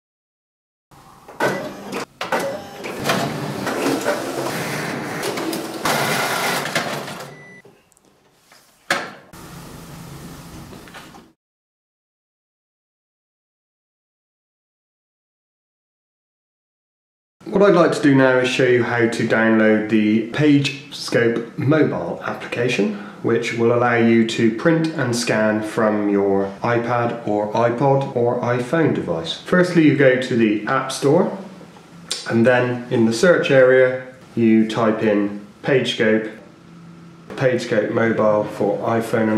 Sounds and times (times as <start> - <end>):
Printer: 1.3 - 7.6.